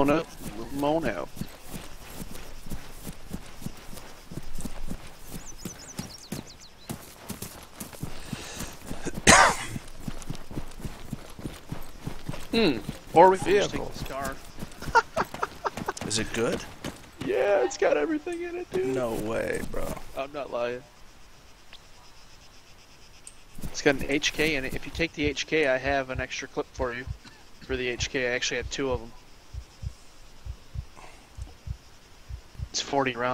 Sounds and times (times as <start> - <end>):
Speech: 0.0 - 1.4, 12.6 - 14.4, 16.0 - 20.9, 23.8 - 29.2, 32.8 - 33.3.